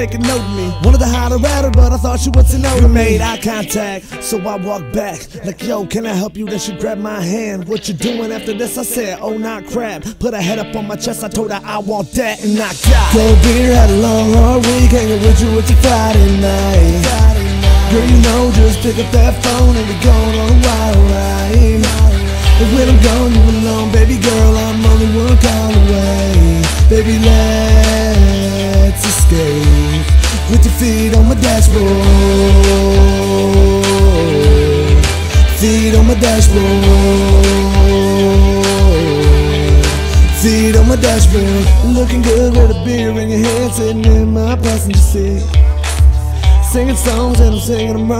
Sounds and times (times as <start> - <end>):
Music: 0.0 - 48.1.